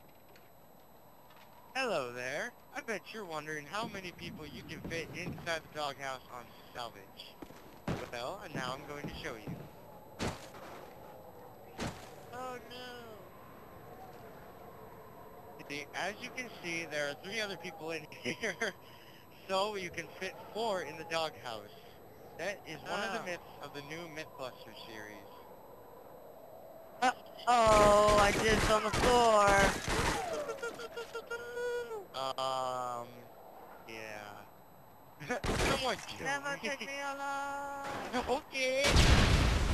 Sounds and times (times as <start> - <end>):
Speech: 1.8 - 7.3, 8.0 - 9.5, 12.3 - 13.3, 15.6 - 18.8, 19.4 - 21.8, 22.4 - 25.4, 27.0 - 33.3, 33.9 - 34.4, 35.2 - 39.0.